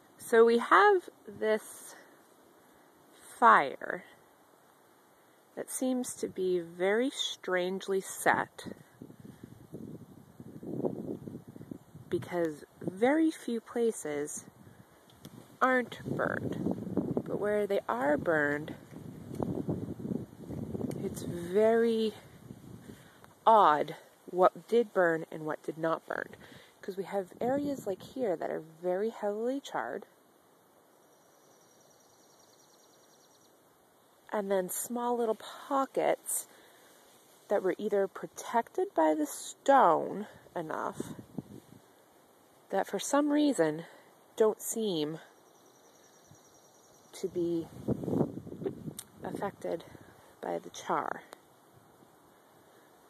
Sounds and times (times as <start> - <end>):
Speech: 0.2 - 2.0, 3.2 - 4.1, 5.6 - 8.8, 12.1 - 14.4, 15.6 - 16.6, 17.3 - 18.8, 21.0 - 22.2, 23.5 - 30.1, 34.3 - 36.5, 37.5 - 41.1, 42.7 - 45.3, 47.2 - 47.7, 49.2 - 51.3.